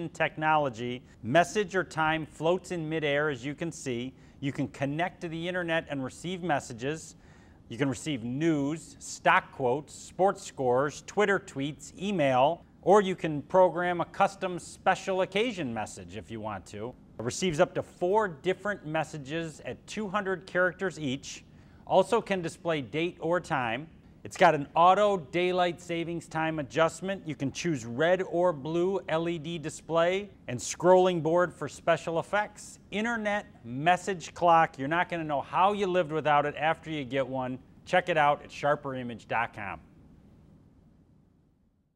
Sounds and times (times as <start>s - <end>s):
Speech: 0.0s - 39.9s.